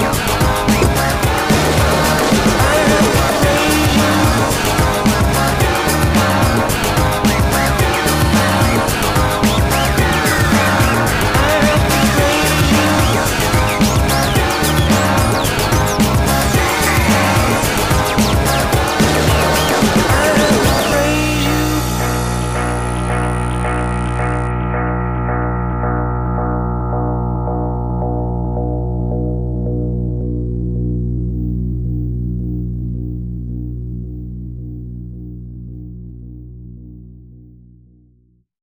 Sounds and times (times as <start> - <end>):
Ambient music: 0.0 - 38.3.